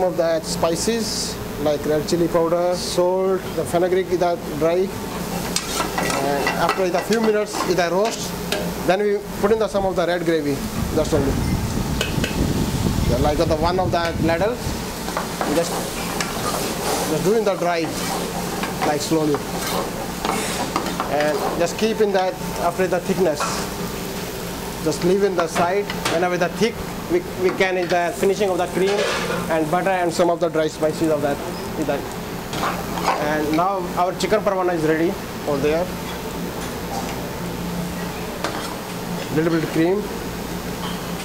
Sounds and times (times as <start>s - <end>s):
Speech: 0.0s - 5.0s, 6.0s - 11.4s, 13.1s - 14.6s, 15.4s - 15.9s, 17.0s - 18.0s, 18.8s - 19.4s, 21.1s - 23.6s, 24.8s - 32.1s, 33.1s - 35.9s, 39.3s - 40.2s.